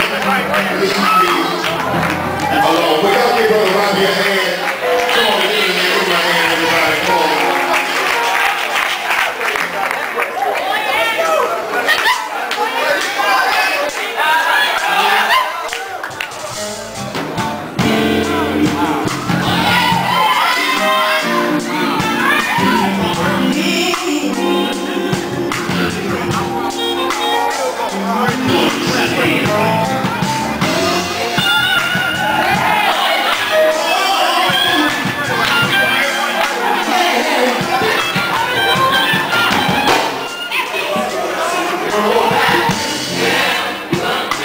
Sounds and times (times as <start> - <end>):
Music: 0.0 - 11.3, 14.5 - 44.4
Male singing: 21.0 - 26.6, 27.8 - 29.9, 41.4 - 44.4.